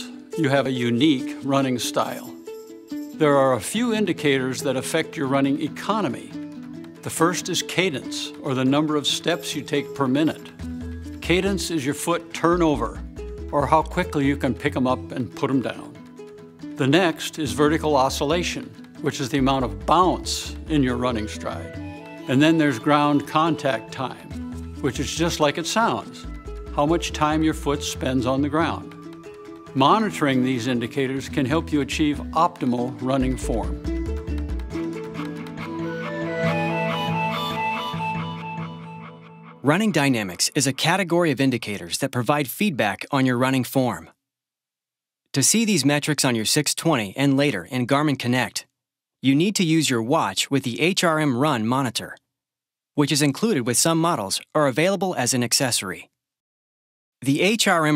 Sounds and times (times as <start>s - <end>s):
Speech: 0.0s - 2.4s, 3.2s - 6.4s, 7.0s - 10.5s, 11.2s - 16.0s, 16.8s - 21.7s, 22.3s - 28.9s, 29.8s - 33.8s, 39.6s - 44.2s, 45.4s - 52.2s, 53.0s - 56.1s, 57.2s - 57.9s
Music: 0.0s - 40.8s.